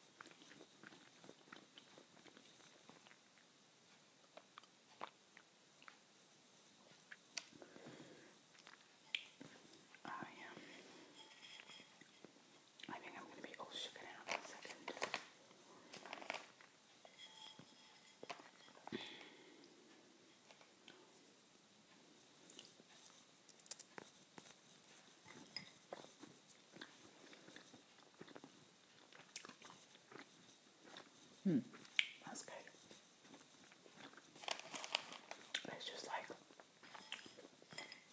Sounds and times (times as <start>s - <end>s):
Inside, small room: 0.0s - 38.1s.